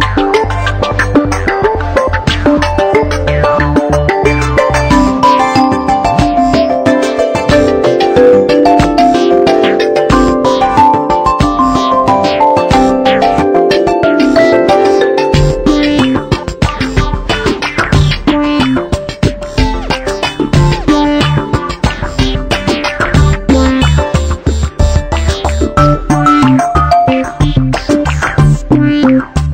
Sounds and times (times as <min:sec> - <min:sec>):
Music: 0:00.0 - 0:29.5.